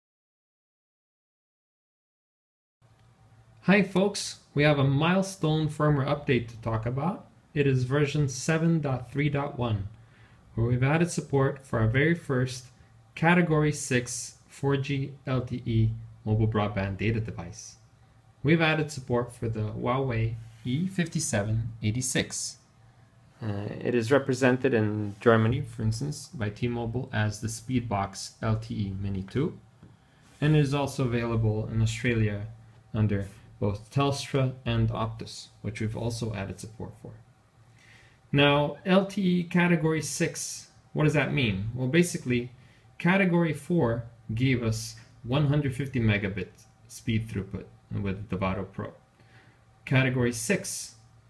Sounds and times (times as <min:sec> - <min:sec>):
Speech: 0:03.6 - 0:10.0, 0:10.6 - 0:22.6, 0:23.4 - 0:29.7, 0:30.4 - 0:37.3, 0:38.3 - 0:49.0, 0:49.8 - 0:51.0.